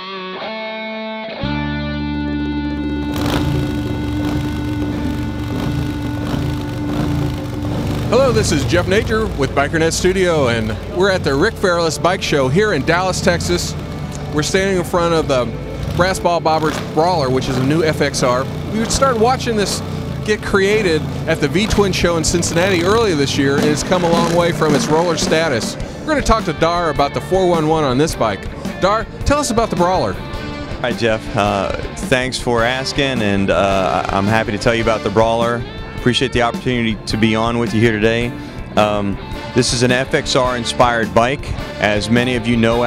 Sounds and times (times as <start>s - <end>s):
Music: 0.0s - 42.8s
Speech: 8.1s - 30.2s, 30.8s - 42.8s.